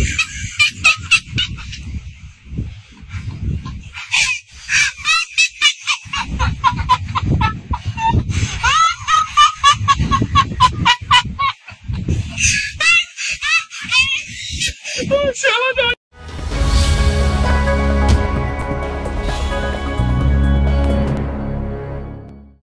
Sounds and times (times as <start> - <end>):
Speech: 15.0 - 16.0
Music: 16.1 - 22.6.